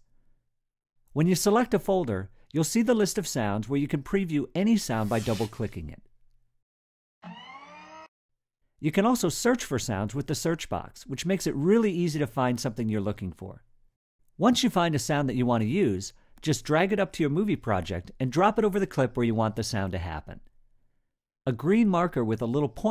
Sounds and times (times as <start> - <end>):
Speech: 1.2 - 6.1, 8.8 - 13.6, 14.4 - 20.5, 21.5 - 22.9.